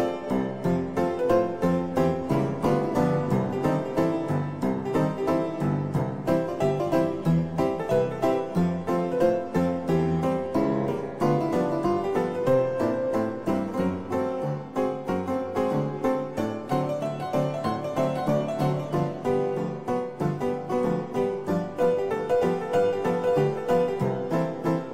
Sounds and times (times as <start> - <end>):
Piano: 0.0 - 24.9.